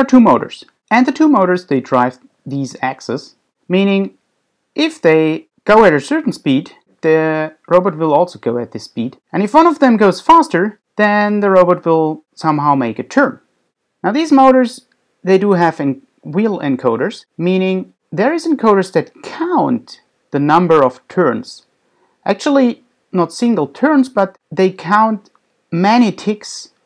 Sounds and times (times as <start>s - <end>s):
Speech: 0.0s - 4.2s, 4.8s - 13.4s, 14.0s - 26.8s.